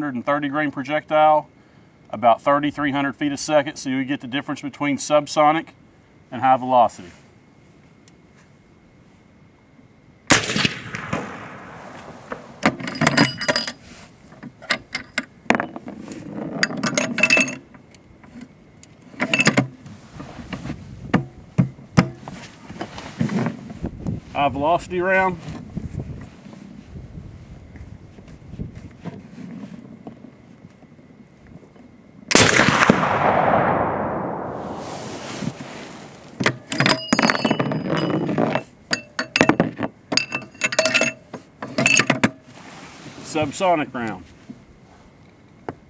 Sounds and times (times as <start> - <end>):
Speech: 0.0 - 1.5, 2.1 - 7.2, 24.3 - 25.5, 43.2 - 44.3.